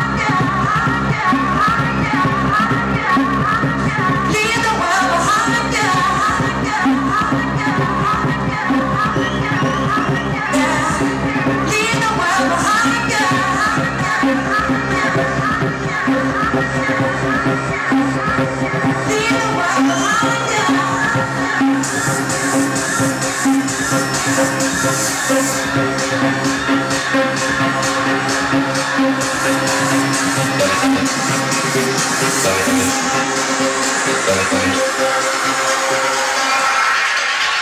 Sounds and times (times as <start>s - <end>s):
Independent music: 0.0s - 37.6s.